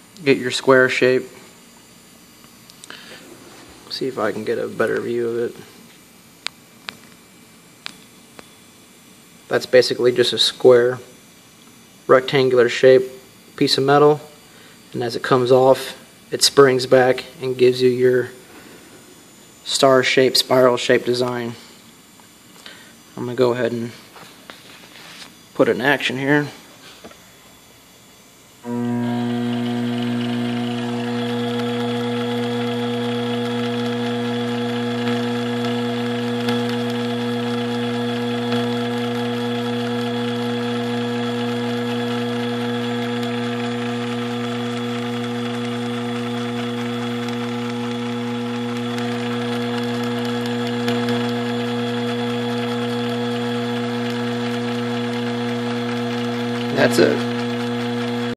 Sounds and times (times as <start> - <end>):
Mechanisms: 0.0 - 58.3.